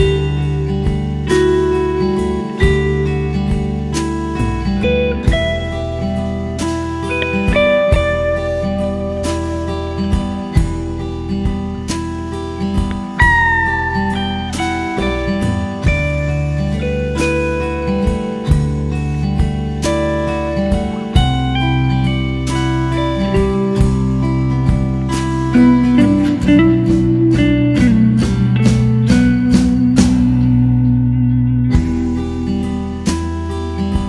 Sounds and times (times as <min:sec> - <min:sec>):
Steel guitar, slide guitar: 0:00.0 - 0:34.0
Ambient music: 0:12.0 - 0:33.7.